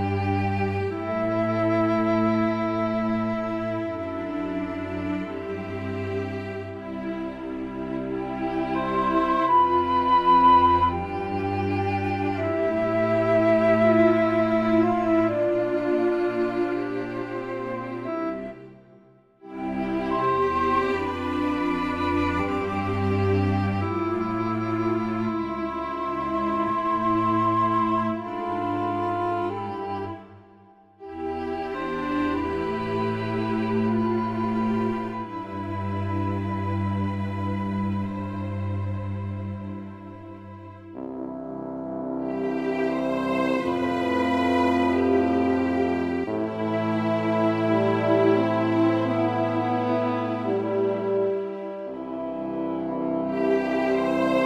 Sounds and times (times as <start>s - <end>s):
Music: 0.0s - 54.4s.